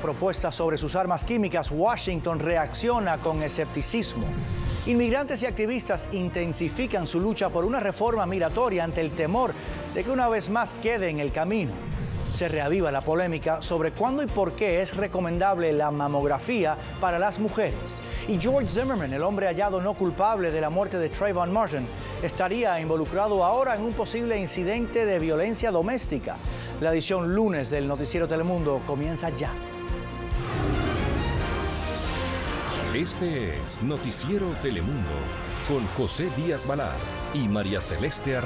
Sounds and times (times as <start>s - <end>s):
Speech: 0.0s - 4.3s, 4.9s - 11.7s, 12.4s - 29.6s, 32.9s - 38.4s
Music: 0.0s - 38.4s.